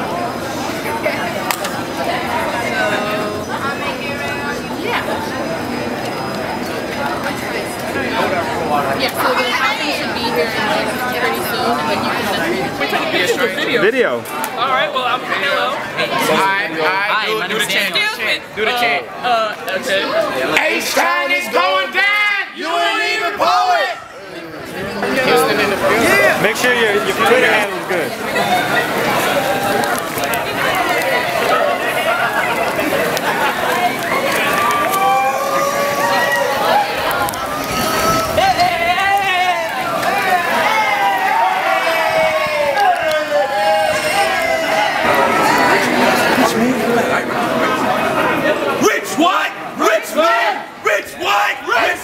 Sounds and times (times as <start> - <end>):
Speech: 0.0 - 52.0.